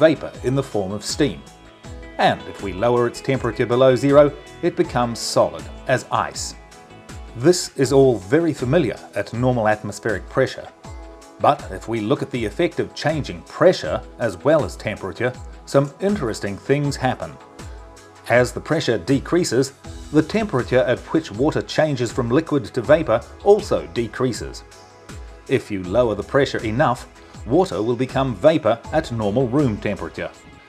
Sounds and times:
Speech: 0:00.0 - 0:01.5, 0:02.2 - 0:06.6, 0:07.4 - 0:10.8, 0:11.4 - 0:17.4, 0:18.3 - 0:24.6, 0:25.5 - 0:30.5
Music: 0:00.0 - 0:30.6.

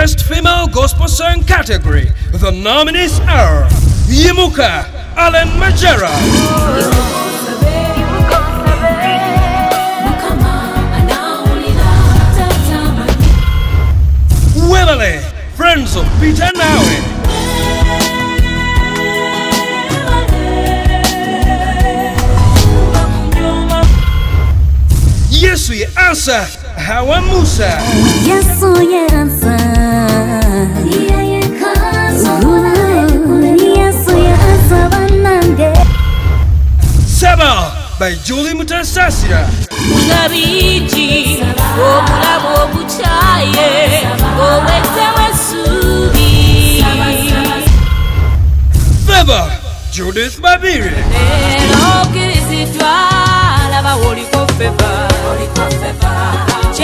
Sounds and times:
Speech: 0:00.0 - 0:06.8, 0:14.6 - 0:17.1, 0:25.3 - 0:28.0, 0:37.1 - 0:39.7, 0:49.1 - 0:51.3
Gospel music: 0:00.0 - 0:48.4, 0:49.2 - 0:56.8.

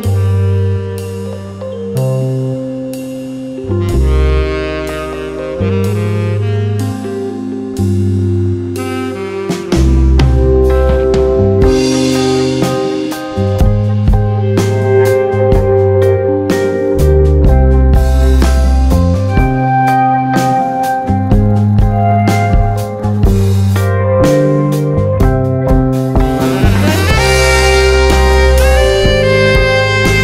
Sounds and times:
Jazz: 0:00.0 - 0:30.2.

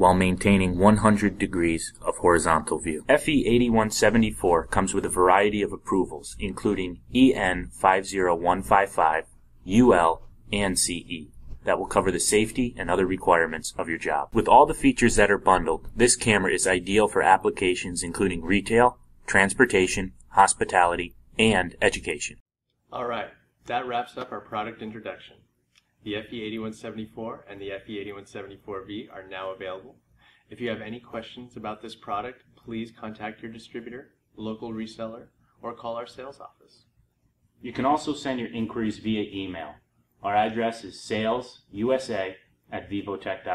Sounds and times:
Speech: 0:00.0 - 0:25.4, 0:26.0 - 0:36.8, 0:37.6 - 0:43.5.

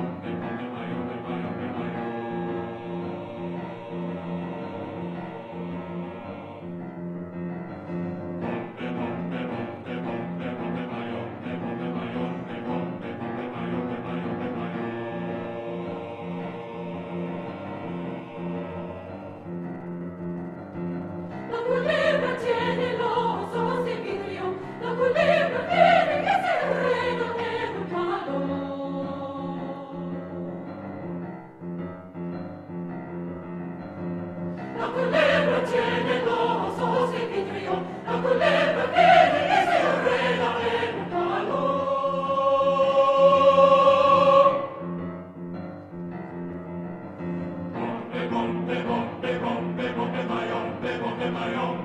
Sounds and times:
Choir: 0:00.0 - 0:20.1, 0:20.7 - 0:31.0, 0:34.4 - 0:45.4, 0:47.1 - 0:51.8.

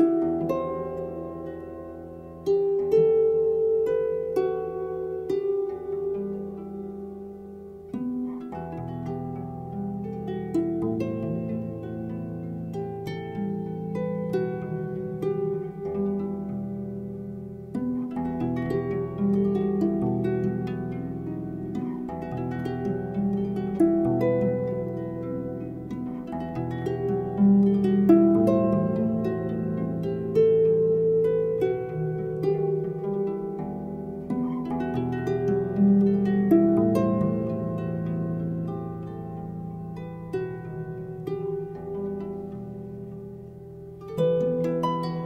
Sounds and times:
Music: 0:00.0 - 0:45.2.

